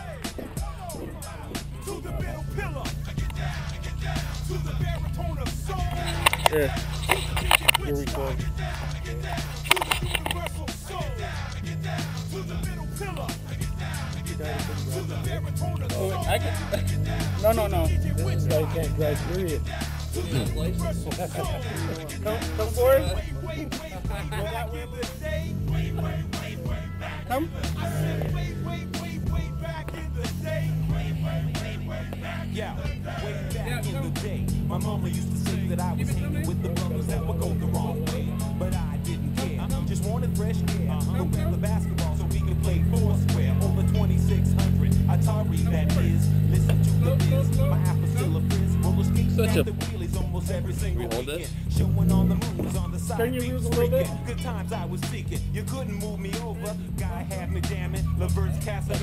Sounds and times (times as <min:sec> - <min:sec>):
Music: 0:00.0 - 0:59.0
Vehicle: 0:00.0 - 0:59.0
Speech: 0:06.0 - 0:06.8, 0:07.7 - 0:08.4, 0:14.4 - 0:14.8, 0:15.8 - 0:19.6, 0:20.2 - 0:24.9, 0:27.3 - 0:28.3, 0:33.1 - 0:34.2, 0:47.0 - 0:50.0, 0:50.7 - 0:54.3.